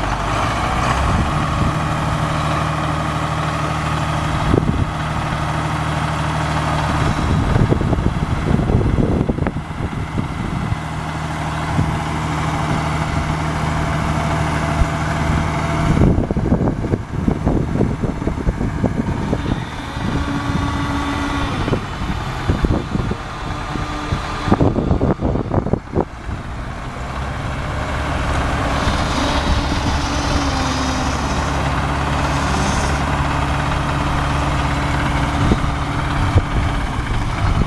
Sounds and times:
Vehicle: 0.0 - 37.6.

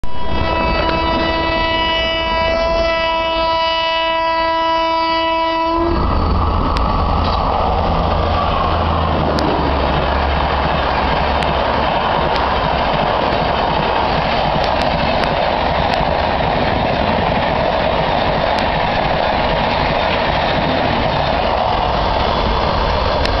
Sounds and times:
Railroad car, train wagon: 0.0 - 23.4
Train: 0.0 - 23.4.

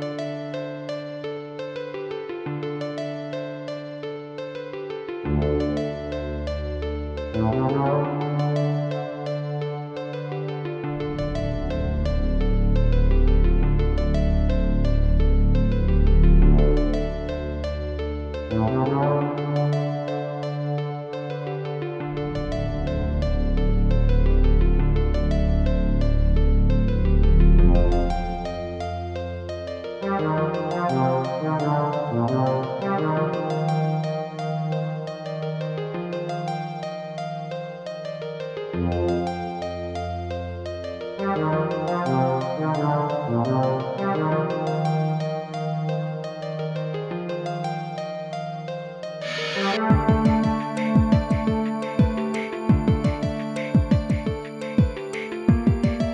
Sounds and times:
Music: 0.0 - 56.1.

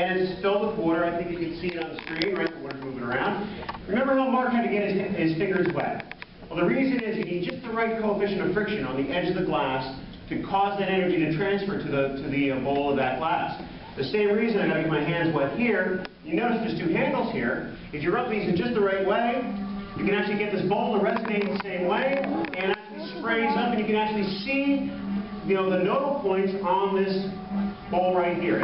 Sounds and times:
Speech: 0.0 - 28.6
Music: 18.3 - 28.6.

